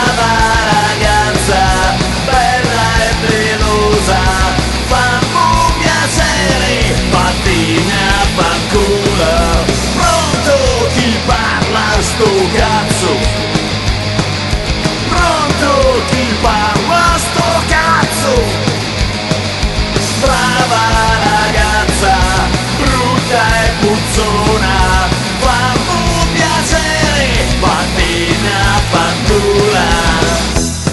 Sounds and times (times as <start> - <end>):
Punk rock: 0.0 - 30.9.